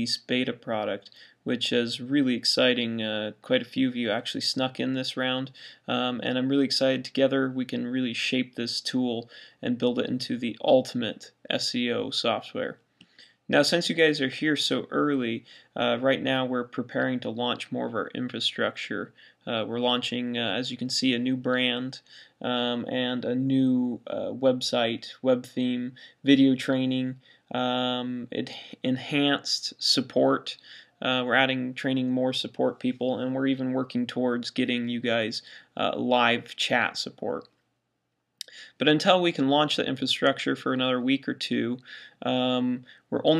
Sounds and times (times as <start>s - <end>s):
Speech: 0.0s - 12.8s, 13.5s - 37.5s, 38.4s - 43.3s.